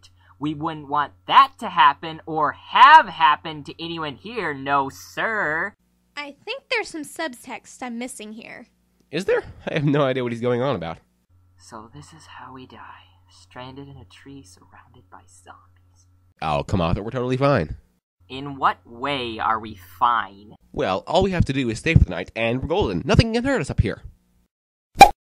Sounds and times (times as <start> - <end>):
Speech: 16.4 - 24.1.